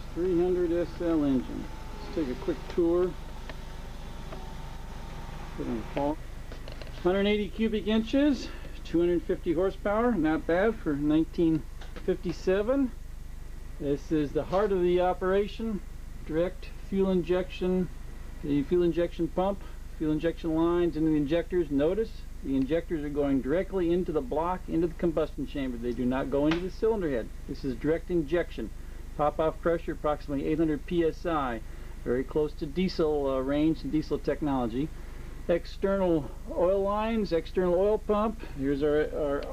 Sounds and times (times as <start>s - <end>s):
Speech: 0.2s - 3.2s, 5.6s - 6.2s, 7.0s - 13.0s, 13.8s - 39.5s.